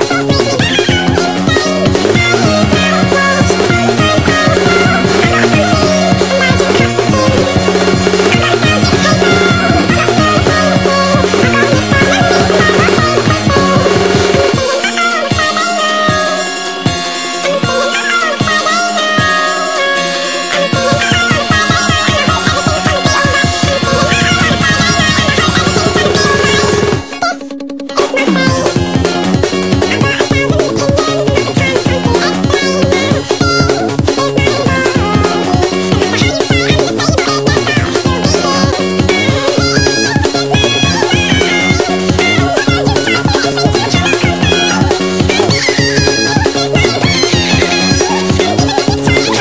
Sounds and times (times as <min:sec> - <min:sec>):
Music: 0:00.0 - 0:49.4.